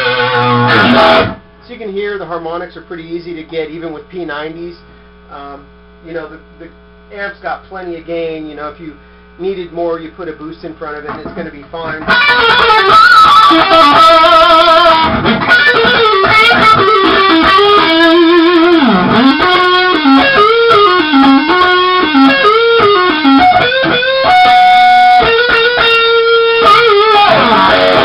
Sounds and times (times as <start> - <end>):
Rock music: 0.0 - 1.4, 11.9 - 28.0
Tapping (guitar technique): 0.0 - 1.4, 10.4 - 28.0.